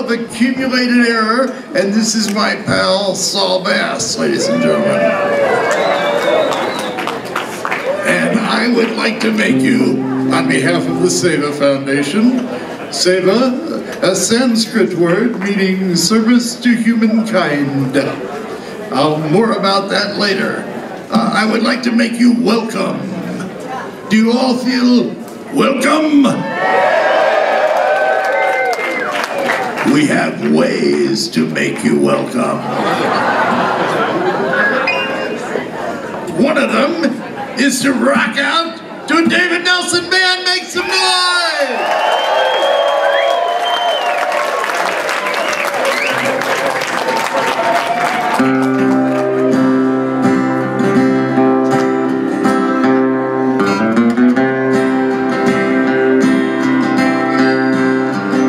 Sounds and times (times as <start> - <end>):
Speech: 0.0 - 5.1, 8.0 - 18.2, 18.9 - 26.5, 29.8 - 32.7, 36.3 - 41.8.